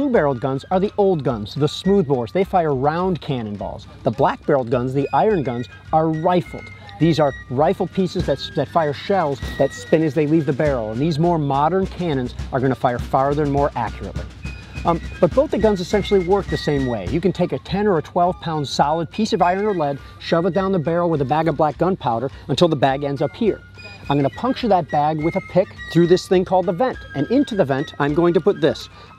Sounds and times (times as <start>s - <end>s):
Speech: 0.0s - 28.9s
Music: 0.0s - 29.1s.